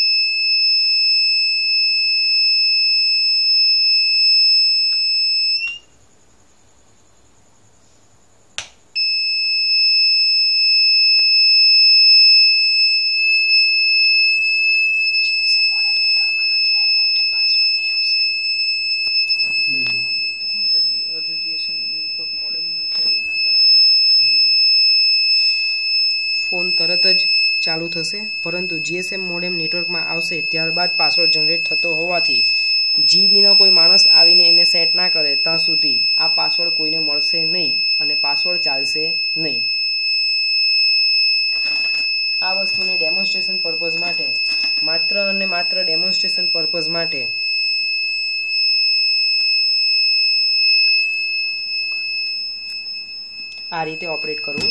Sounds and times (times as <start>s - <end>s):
Inside, small room: 0.0s - 54.7s
Speech: 42.4s - 47.3s, 53.7s - 54.7s.